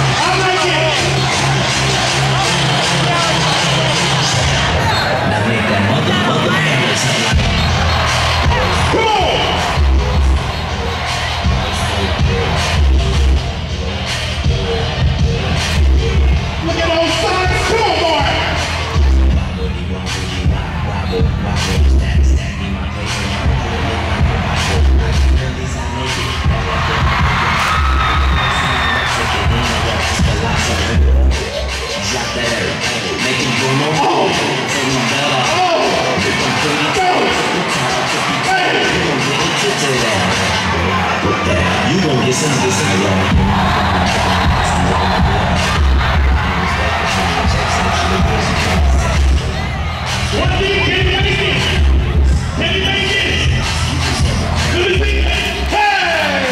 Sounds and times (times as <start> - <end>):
Speech: 0.0 - 7.4, 8.5 - 9.7, 16.6 - 18.7, 28.6 - 43.4, 50.3 - 56.5
Crowd: 0.0 - 56.5
Music: 0.0 - 56.5.